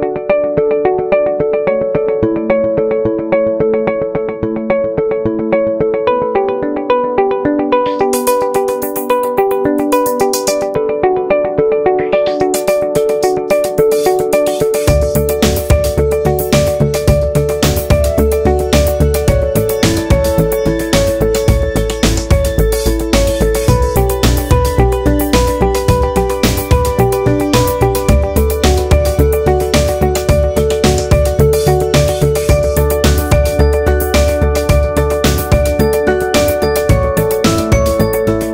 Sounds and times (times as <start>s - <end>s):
Music: 0.0s - 38.5s.